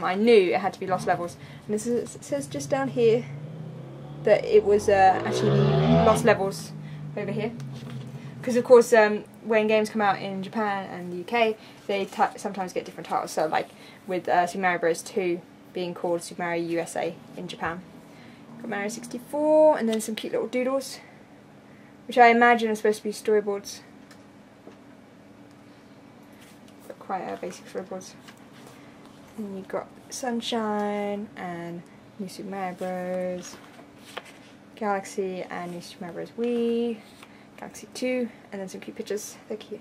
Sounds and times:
Speech: 0:00.0 - 0:03.3, 0:04.3 - 0:07.6, 0:08.4 - 0:17.8, 0:18.6 - 0:21.1, 0:22.1 - 0:23.9, 0:26.8 - 0:28.2, 0:29.4 - 0:33.6, 0:34.8 - 0:39.8.

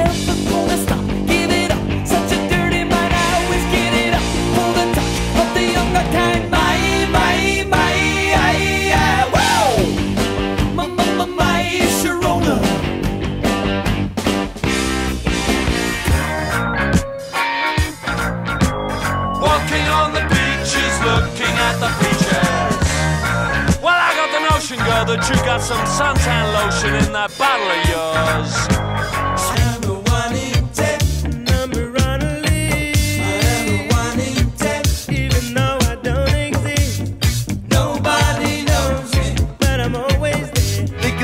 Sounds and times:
Ska: 0:00.0 - 0:41.2.

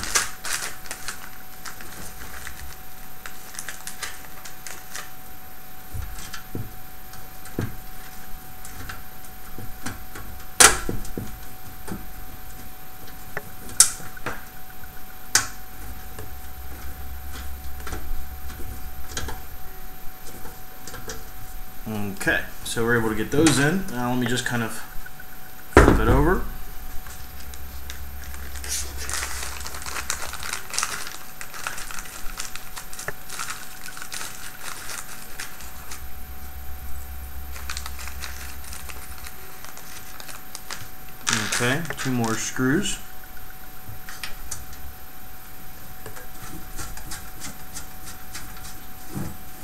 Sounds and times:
Crumpling, crinkling: 0:00.0 - 0:12.6, 0:27.2 - 0:44.8.

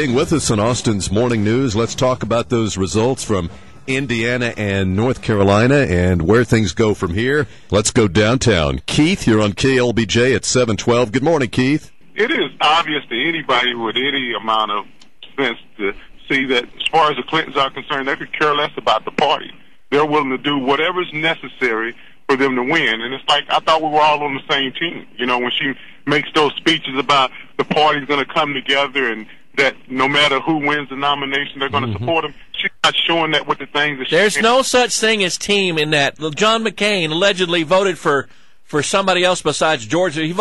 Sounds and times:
Speech: 0:00.0 - 0:40.4.

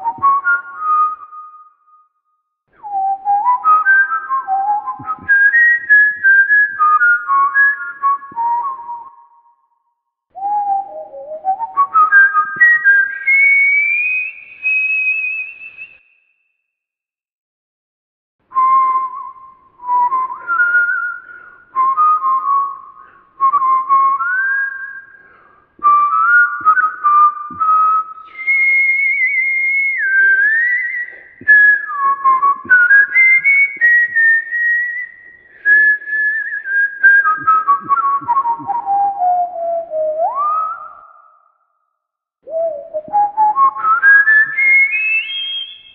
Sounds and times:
Whistling: 0:00.0 - 0:16.9, 0:18.5 - 0:45.9.

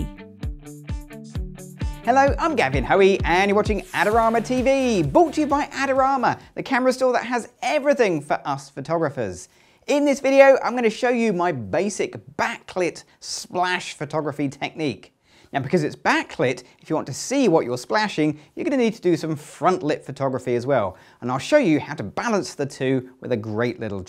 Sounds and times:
Speech: 0:02.1 - 0:24.0.

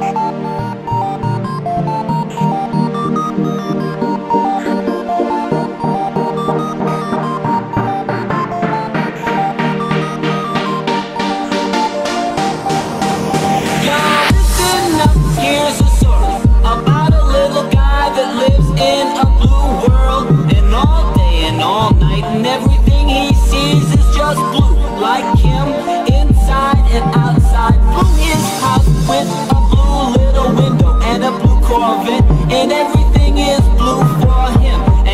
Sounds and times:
Dubstep: 0:00.0 - 0:35.1.

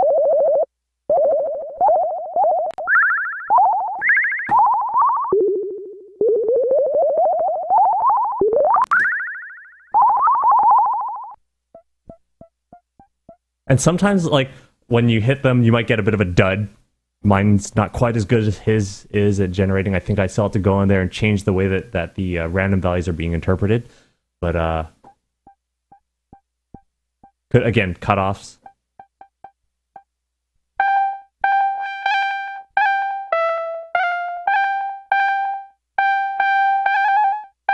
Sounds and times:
Speech: 0:13.7 - 0:25.0, 0:27.5 - 0:28.6.

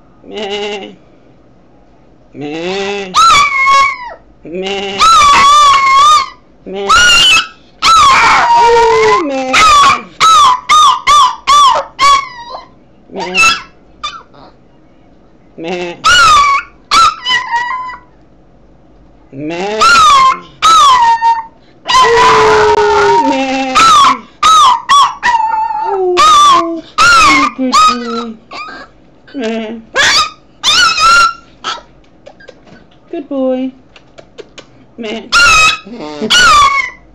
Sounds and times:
Domestic animals, pets: 0:02.4 - 0:14.9, 0:15.6 - 0:18.2, 0:19.4 - 0:33.0, 0:33.9 - 0:37.1.

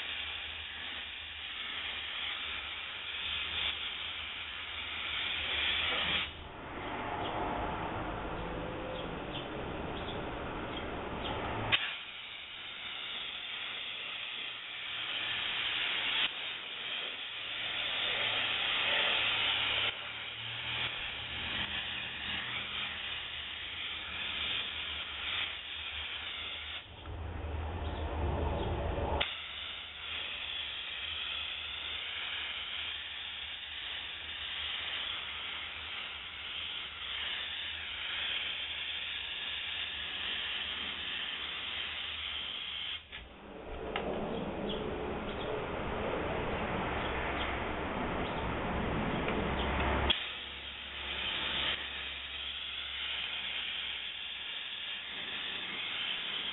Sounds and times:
Car: 0:06.4 - 0:11.8.

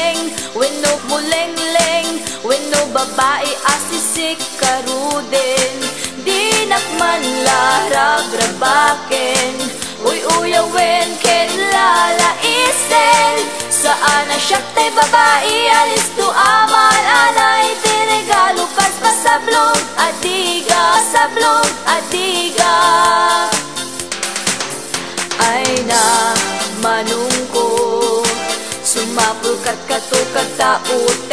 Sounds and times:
Music: 0:00.0 - 0:31.3.

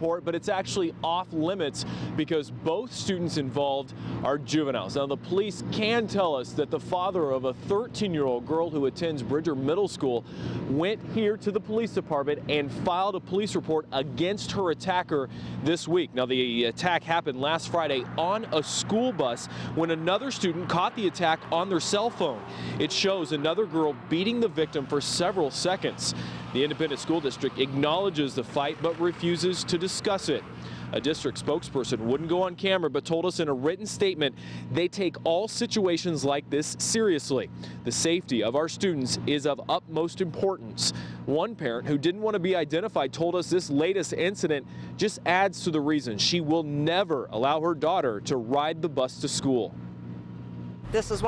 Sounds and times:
Speech: 0:00.0 - 0:49.7, 0:50.9 - 0:51.2
Bus: 0:00.0 - 0:51.2.

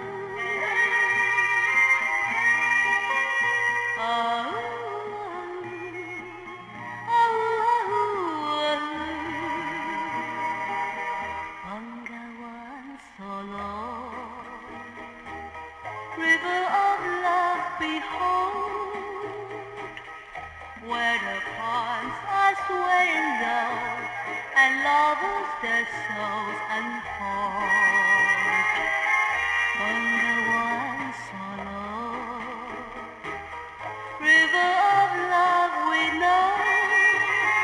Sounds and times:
Music: 0:00.0 - 0:37.6
Synthetic singing: 0:20.8 - 0:28.2, 0:29.8 - 0:32.9, 0:34.2 - 0:37.6.

